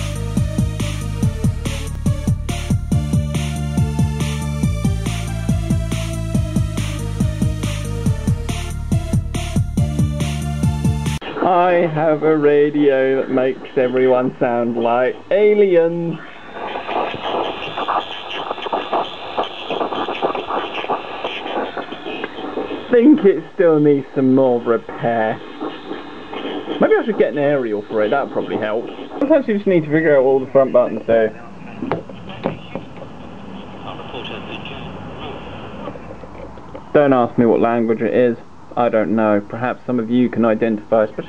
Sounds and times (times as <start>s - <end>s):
Speech: 11.2s - 36.1s, 36.9s - 41.2s.